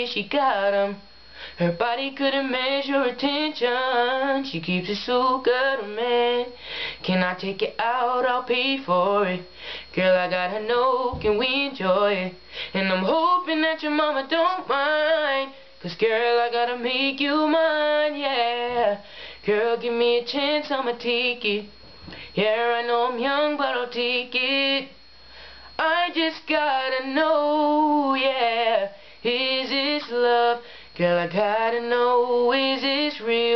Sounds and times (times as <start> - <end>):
Male singing: 0.0 - 1.0, 1.6 - 21.7, 22.4 - 24.9, 25.8 - 33.5.